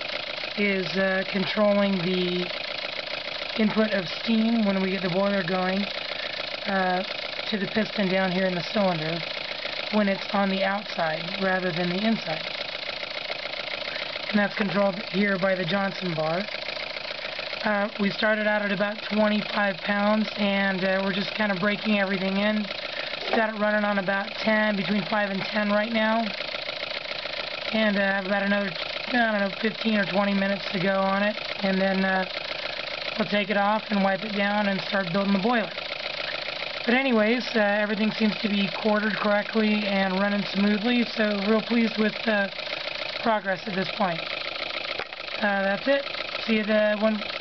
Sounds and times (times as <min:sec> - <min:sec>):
Speech: 0:00.6 - 0:02.5, 0:03.6 - 0:05.9, 0:06.7 - 0:09.2, 0:10.0 - 0:12.5, 0:14.4 - 0:16.5, 0:17.6 - 0:22.7, 0:23.4 - 0:26.4, 0:27.8 - 0:32.3, 0:33.2 - 0:35.8, 0:36.9 - 0:42.5, 0:43.2 - 0:44.2, 0:45.4 - 0:47.2.